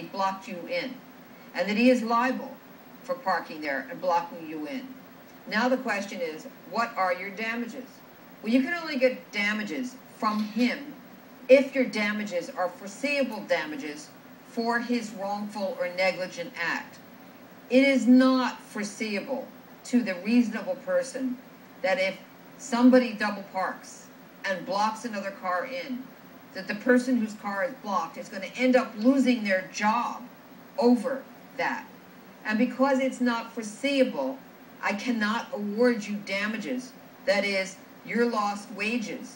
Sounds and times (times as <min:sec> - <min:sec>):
Speech: 0:01.6 - 0:17.0, 0:17.7 - 0:26.0, 0:26.6 - 0:39.3.